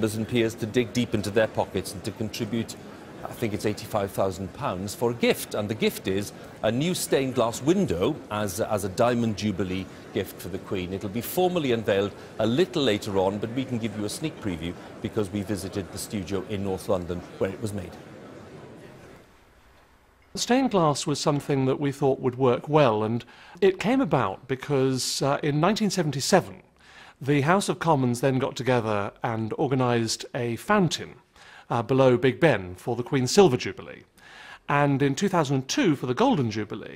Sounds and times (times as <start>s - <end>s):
Speech: 0.0s - 18.0s, 20.4s - 34.1s, 34.7s - 36.9s.